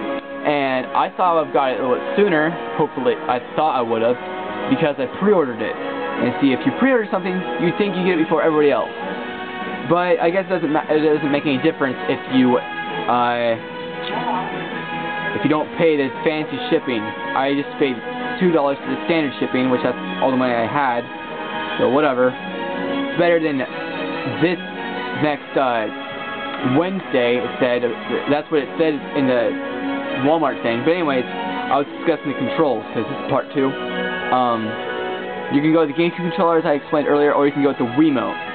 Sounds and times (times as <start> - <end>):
Music: 0.0 - 38.5
Speech: 0.4 - 8.9, 9.8 - 14.5, 15.4 - 21.1, 21.8 - 22.4, 23.2 - 23.7, 24.3 - 24.6, 25.2 - 25.9, 26.6 - 29.6, 30.2 - 34.8, 35.5 - 38.4.